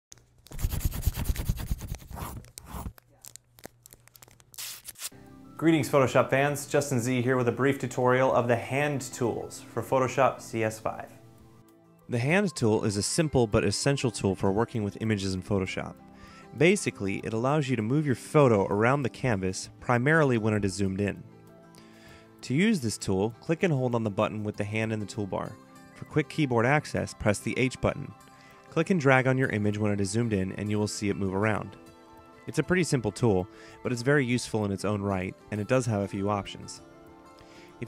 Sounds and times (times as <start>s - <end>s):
Music: 5.1s - 37.8s
Speech: 5.6s - 11.2s, 12.1s - 16.0s, 16.6s - 21.2s, 22.4s - 28.1s, 28.7s - 31.8s, 32.5s - 36.8s.